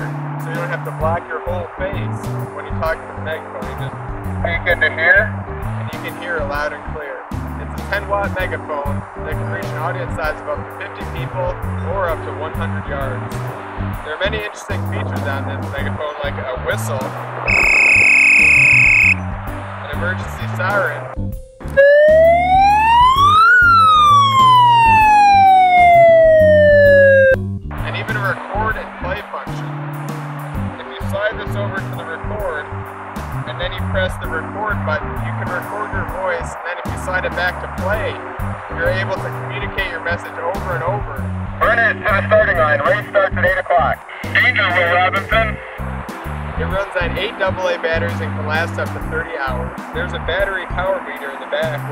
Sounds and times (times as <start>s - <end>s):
Speech: 0.0s - 13.3s, 14.0s - 17.1s, 19.9s - 21.2s, 27.8s - 29.6s, 30.8s - 32.6s, 33.5s - 45.6s, 46.6s - 51.9s
Music: 0.0s - 51.9s
Police car (siren): 17.5s - 19.2s, 21.8s - 27.4s.